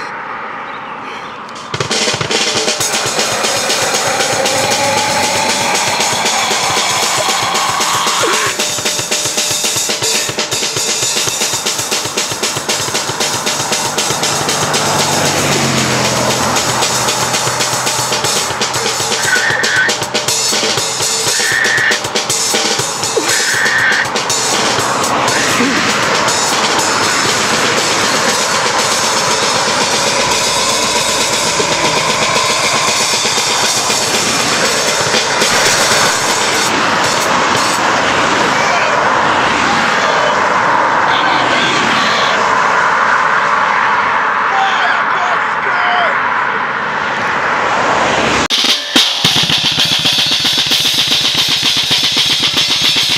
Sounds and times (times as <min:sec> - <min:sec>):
Music: 0:01.6 - 0:37.9, 0:48.5 - 0:53.1.